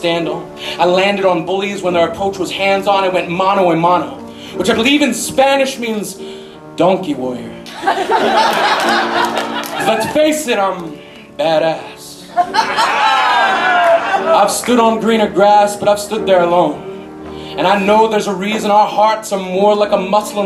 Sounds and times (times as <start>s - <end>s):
Speech: 0.0s - 6.2s, 6.8s - 7.6s, 9.8s - 12.3s, 14.4s - 16.8s, 17.6s - 20.4s
Music: 0.0s - 20.4s.